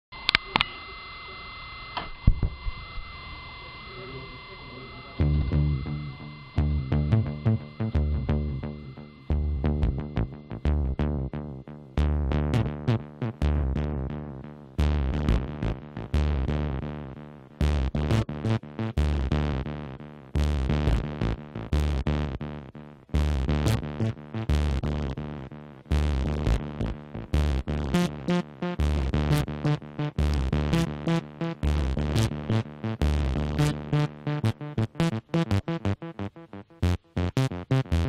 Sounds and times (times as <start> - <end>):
Synthesizer: 3.6 - 38.0.